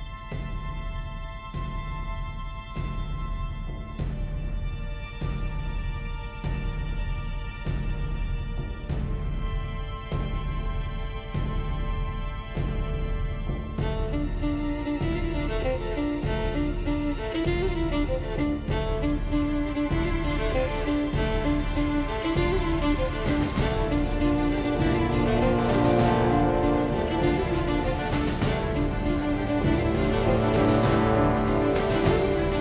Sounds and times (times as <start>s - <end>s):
Music: 0.0s - 32.6s.